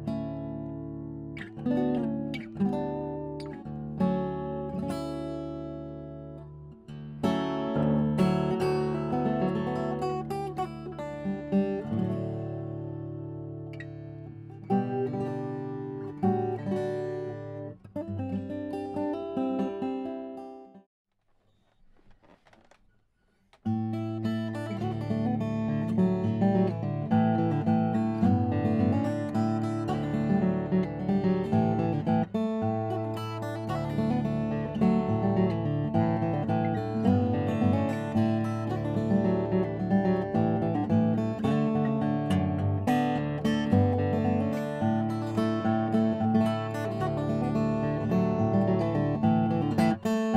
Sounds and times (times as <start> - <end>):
Acoustic guitar: 0.0 - 20.9, 23.6 - 50.3.